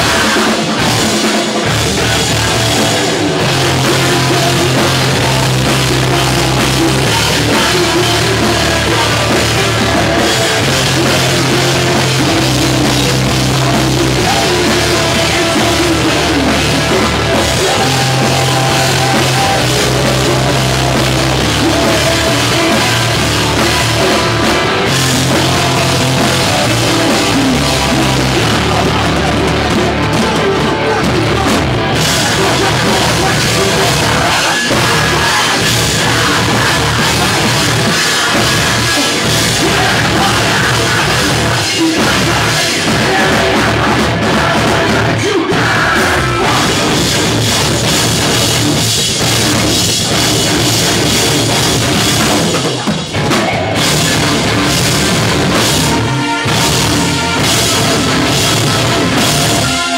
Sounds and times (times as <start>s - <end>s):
Rock music: 0.0s - 59.9s.